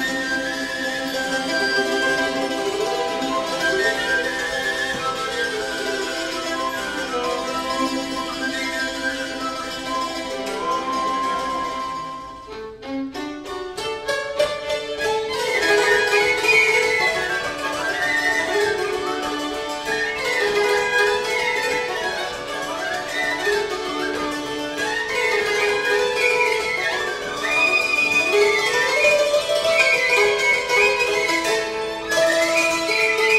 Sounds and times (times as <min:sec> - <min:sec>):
Traditional music: 0:00.0 - 0:33.3.